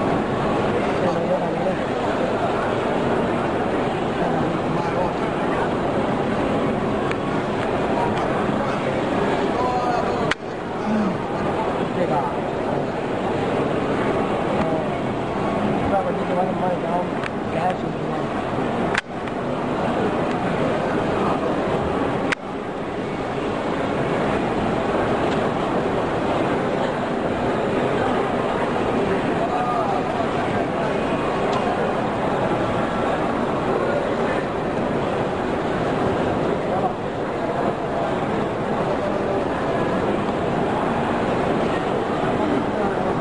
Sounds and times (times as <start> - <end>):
Speech: 0.0 - 18.8, 23.0 - 43.2.